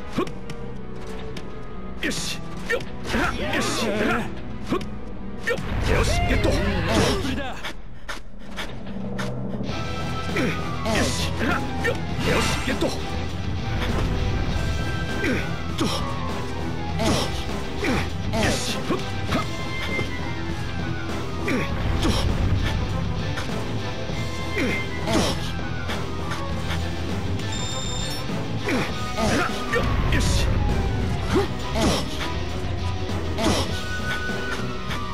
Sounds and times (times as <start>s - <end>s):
Music: 0.0s - 35.1s.